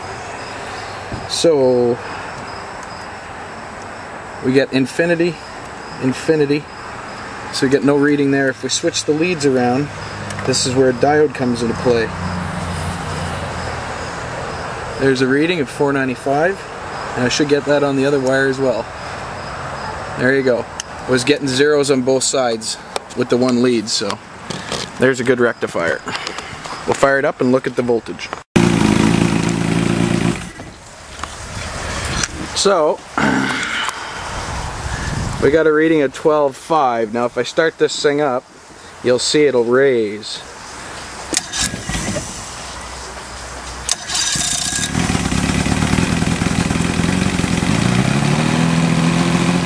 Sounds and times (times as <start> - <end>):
Vehicle: 0.0 - 49.6
Speech: 1.3 - 2.0, 4.4 - 5.4, 6.0 - 6.7, 7.5 - 9.9, 10.5 - 12.1, 15.0 - 18.9, 20.2 - 24.2, 25.0 - 26.1, 26.9 - 28.4, 32.5 - 33.8, 35.4 - 40.5.